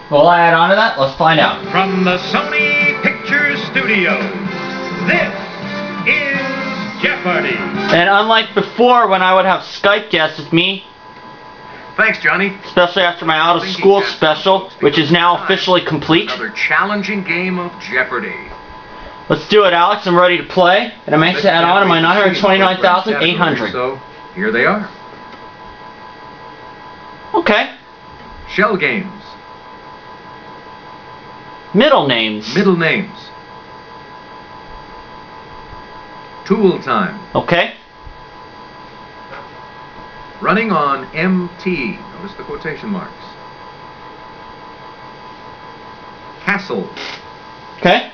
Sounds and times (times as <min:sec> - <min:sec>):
Speech: 0:00.1 - 0:04.3, 0:07.0 - 0:10.9, 0:12.0 - 0:18.5, 0:19.3 - 0:25.0, 0:27.3 - 0:27.8, 0:28.5 - 0:29.4, 0:31.7 - 0:33.4, 0:36.4 - 0:37.8, 0:40.4 - 0:43.4, 0:46.4 - 0:47.1, 0:47.8 - 0:48.1
Music: 0:01.3 - 0:09.2.